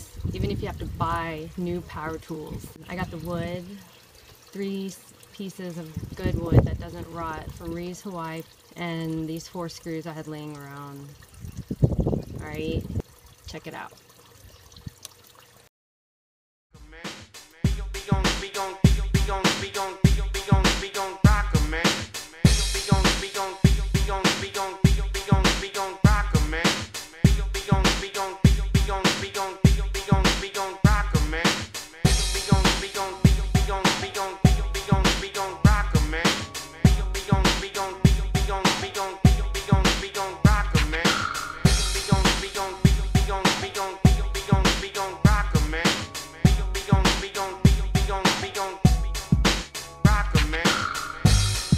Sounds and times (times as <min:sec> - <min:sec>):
Speech: 0:00.3 - 0:03.8, 0:04.6 - 0:11.1, 0:12.4 - 0:12.9, 0:13.5 - 0:14.0
Music: 0:16.8 - 0:51.7.